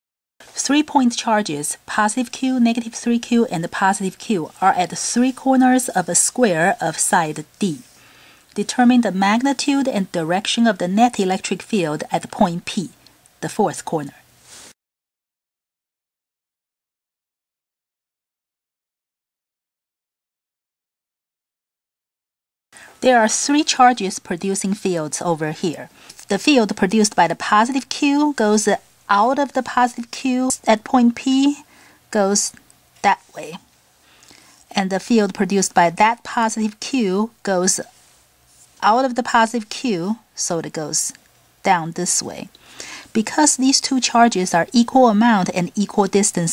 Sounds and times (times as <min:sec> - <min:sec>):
Speech: 0:00.4 - 0:07.9, 0:08.6 - 0:14.2, 0:23.0 - 0:33.6, 0:34.7 - 0:38.0, 0:38.8 - 0:46.5.